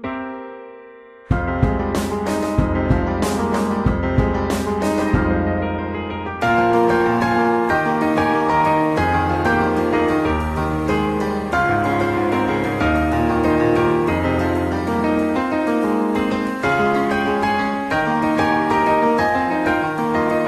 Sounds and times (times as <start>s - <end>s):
Musical instrument: 0.8s - 20.4s.